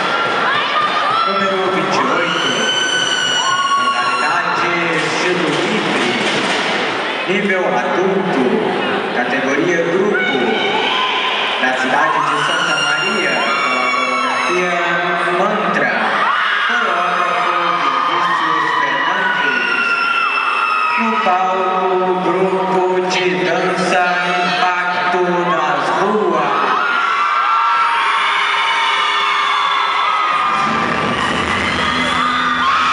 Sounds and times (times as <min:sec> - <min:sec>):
Speech: 0:01.2 - 0:02.8, 0:03.8 - 0:06.3, 0:07.3 - 0:10.7, 0:11.6 - 0:19.8, 0:21.0 - 0:26.7.